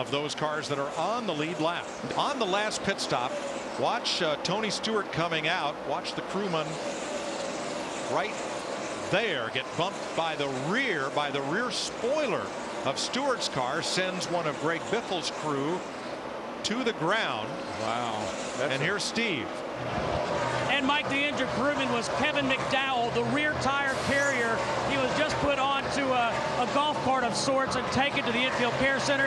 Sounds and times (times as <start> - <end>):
Speech: 0.0 - 6.8, 9.1 - 15.8, 16.7 - 19.5, 20.7 - 29.2.